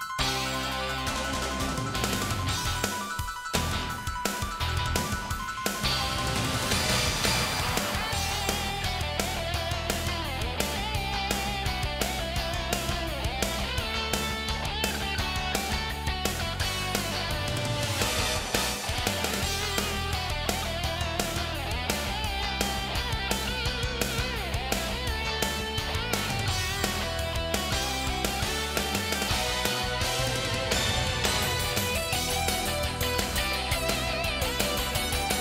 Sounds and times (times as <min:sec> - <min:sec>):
Exciting music: 0:00.0 - 0:35.4.